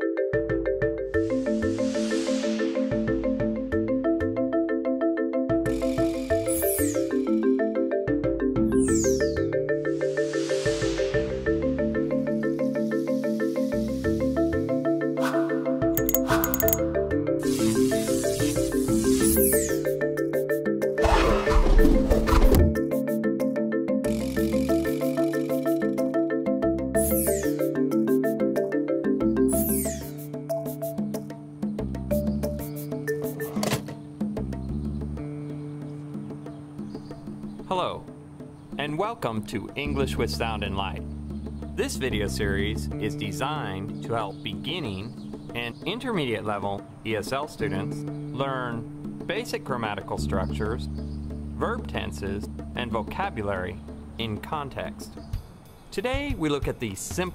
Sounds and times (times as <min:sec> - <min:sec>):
Music: 0:00.0 - 0:57.3
Sound effect: 0:21.0 - 0:22.6.